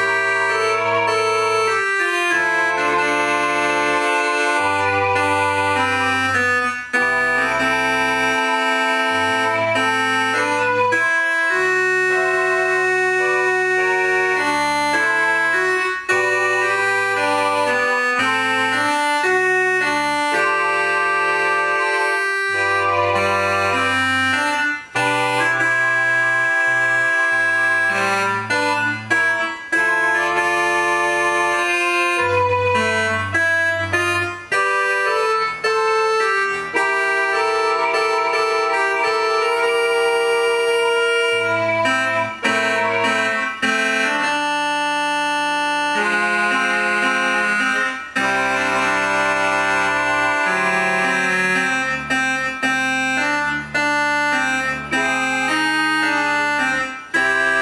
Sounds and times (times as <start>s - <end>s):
Electronic organ: 0.0s - 57.6s
Hammond organ: 0.0s - 57.6s.